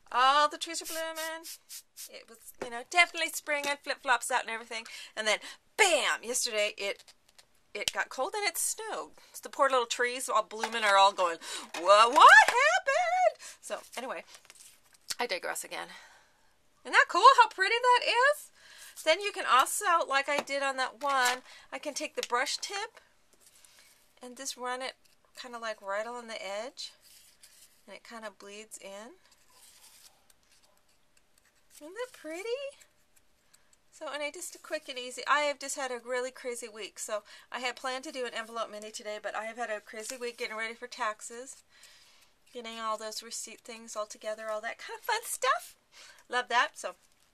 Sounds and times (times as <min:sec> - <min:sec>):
Inside, small room: 0:00.0 - 0:47.3
Speech: 0:00.1 - 0:01.3, 0:07.8 - 0:14.2, 0:16.9 - 0:22.9, 0:31.8 - 0:32.8, 0:42.6 - 0:47.0.